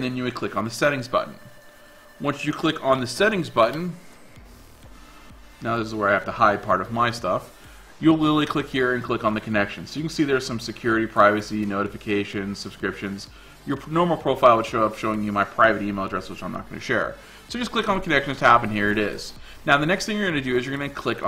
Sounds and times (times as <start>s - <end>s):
Speech: 0.0s - 1.4s, 2.2s - 4.0s, 5.6s - 21.2s
Music: 0.0s - 21.2s.